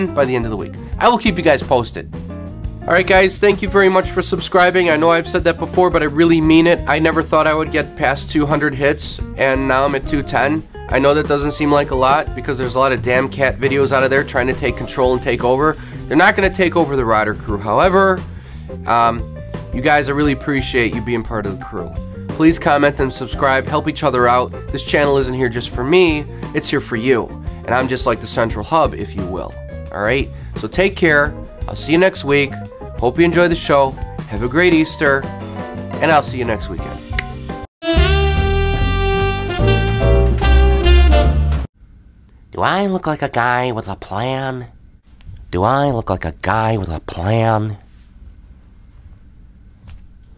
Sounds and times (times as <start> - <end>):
Narration, monologue: 0.0 - 37.7, 42.0 - 48.1
Music: 0.0 - 41.7.